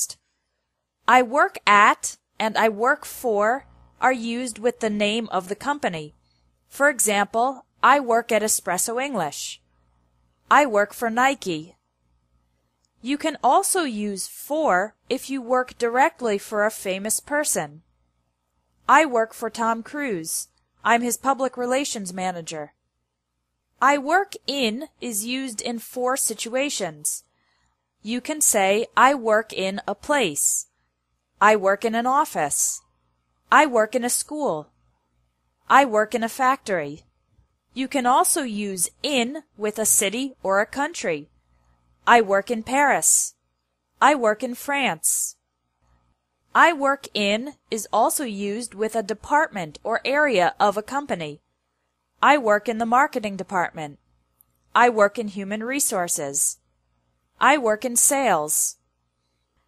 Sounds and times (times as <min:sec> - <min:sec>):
Speech: 0:01.1 - 0:09.6, 0:10.5 - 0:11.8, 0:13.0 - 0:17.8, 0:18.9 - 0:22.7, 0:23.8 - 0:27.2, 0:28.0 - 0:30.7, 0:31.4 - 0:32.8, 0:33.5 - 0:34.7, 0:35.7 - 0:37.0, 0:37.8 - 0:41.3, 0:42.1 - 0:43.4, 0:44.0 - 0:45.4, 0:46.6 - 0:51.4, 0:52.2 - 0:54.0, 0:54.8 - 0:56.6, 0:57.4 - 0:58.8.